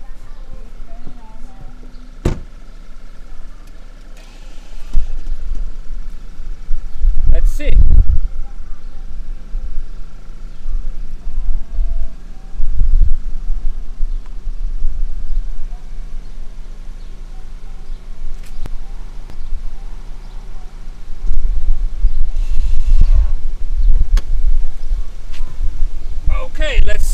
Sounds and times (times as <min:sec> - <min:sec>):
Speech: 0:07.3 - 0:09.1, 0:26.3 - 0:27.1.